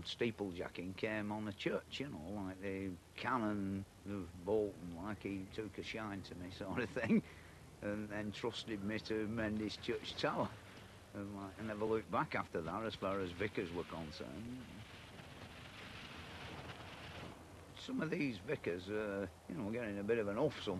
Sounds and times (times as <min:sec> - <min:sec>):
Speech: 0:00.0 - 0:10.6, 0:11.2 - 0:14.8, 0:17.8 - 0:20.7.